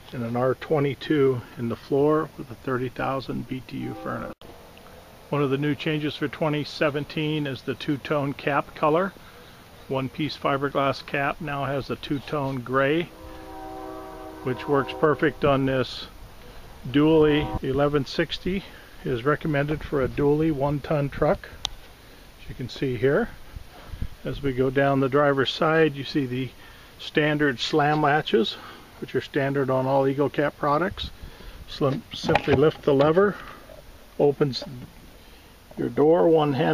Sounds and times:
Speech: 0.0s - 4.4s, 5.3s - 9.2s, 9.9s - 13.1s, 14.4s - 16.1s, 16.8s - 21.6s, 22.4s - 23.4s, 24.2s - 33.6s, 34.2s - 34.9s, 35.8s - 36.7s.

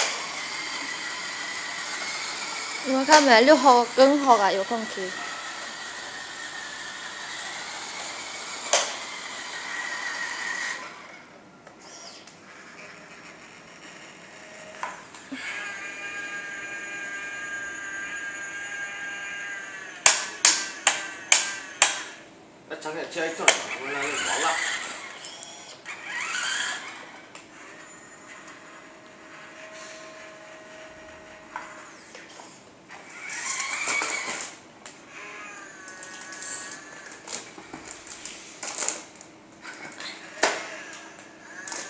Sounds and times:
Speech: 2.9s - 5.2s, 22.7s - 24.7s.

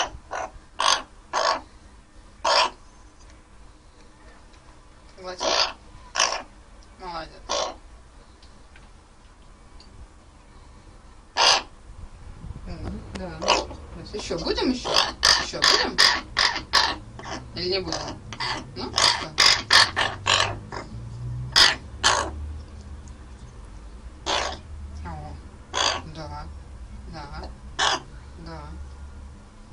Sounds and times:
Crow: 0.0s - 1.6s, 2.5s - 2.8s, 5.4s - 6.5s, 7.5s - 7.8s, 11.4s - 11.7s, 18.0s - 20.6s, 21.6s - 22.4s, 24.3s - 24.6s, 25.8s - 26.1s, 27.8s - 28.1s
Speech: 7.0s - 7.5s, 12.6s - 16.0s, 26.0s - 26.5s, 27.1s - 27.5s, 28.4s - 28.9s.

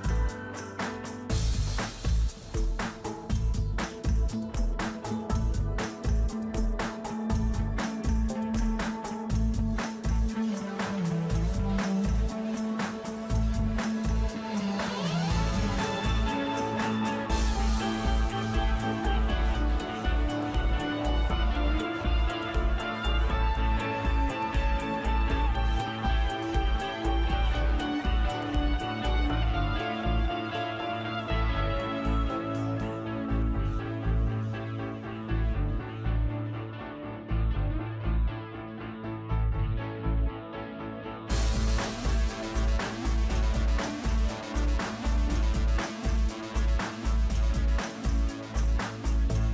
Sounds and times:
Music: 0.0s - 49.5s.

